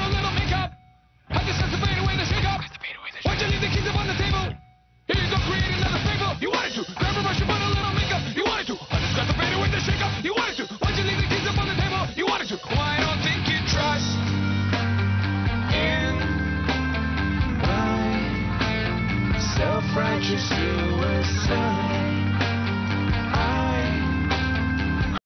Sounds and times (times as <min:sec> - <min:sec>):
Music: 0:00.0 - 0:25.2.